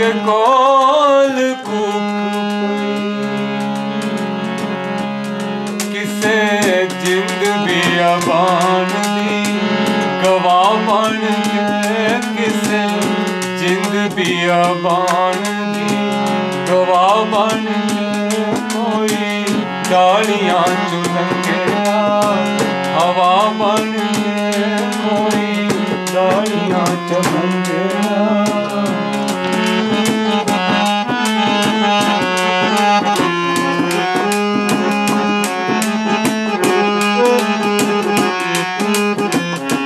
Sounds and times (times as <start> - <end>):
Accordion: 0.0 - 39.8.